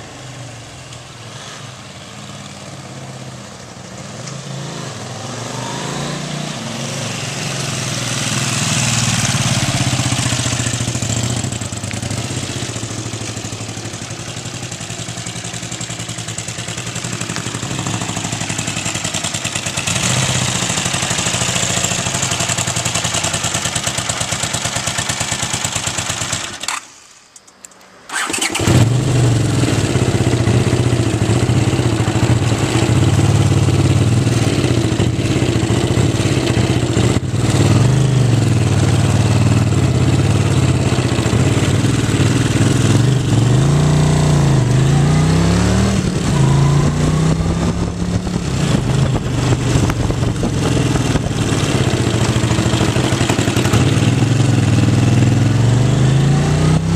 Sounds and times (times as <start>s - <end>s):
Motorcycle: 0.0s - 27.0s, 27.7s - 56.9s
Outside, urban or manmade: 0.0s - 56.9s.